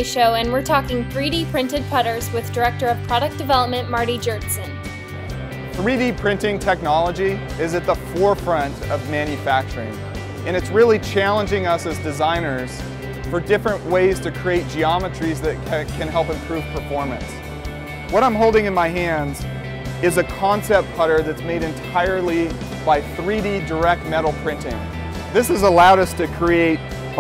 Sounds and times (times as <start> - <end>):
Speech: 0.0 - 4.7, 10.5 - 12.7, 18.2 - 19.4, 20.0 - 24.8, 25.4 - 27.2
Music: 0.0 - 27.2.